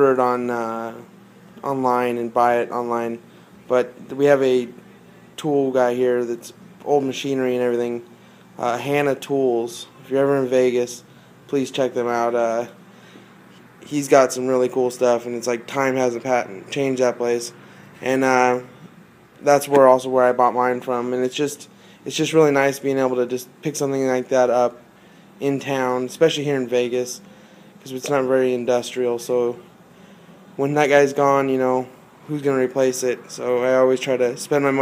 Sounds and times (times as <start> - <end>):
Speech: 0.0 - 12.8, 13.8 - 18.7, 19.4 - 24.8, 25.4 - 27.2, 27.8 - 29.6, 30.6 - 34.8.